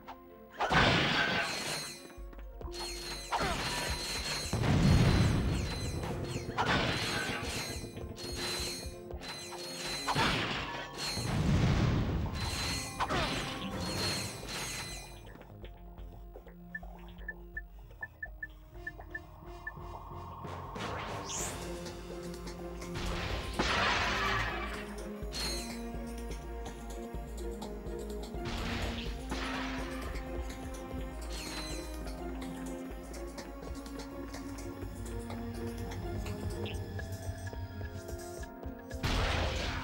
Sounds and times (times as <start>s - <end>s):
Music: 0.0s - 39.8s.